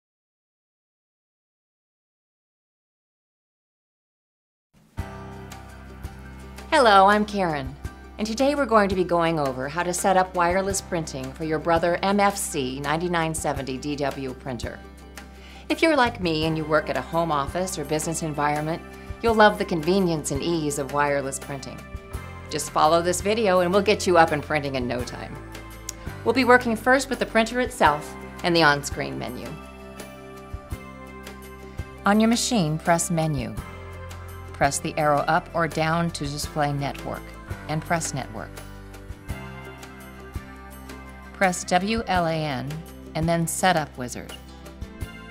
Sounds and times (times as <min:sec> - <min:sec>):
Music: 0:04.8 - 0:45.3
Speech: 0:06.7 - 0:14.8, 0:15.7 - 0:21.8, 0:22.5 - 0:25.4, 0:26.3 - 0:29.6, 0:32.1 - 0:33.6, 0:34.6 - 0:38.5, 0:41.4 - 0:44.4.